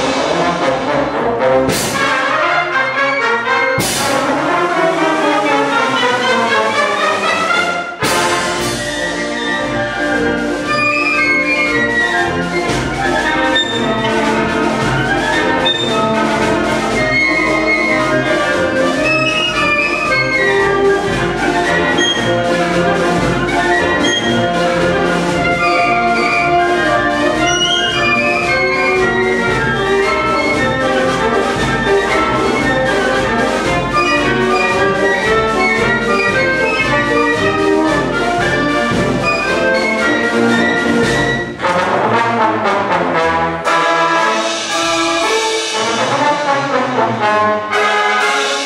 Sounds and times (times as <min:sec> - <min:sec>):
Classical music: 0:00.0 - 0:48.6
Orchestra: 0:00.0 - 0:48.6
Trombone: 0:00.0 - 0:48.6
Trumpet: 0:00.0 - 0:48.6
Jazz: 0:07.5 - 0:48.6.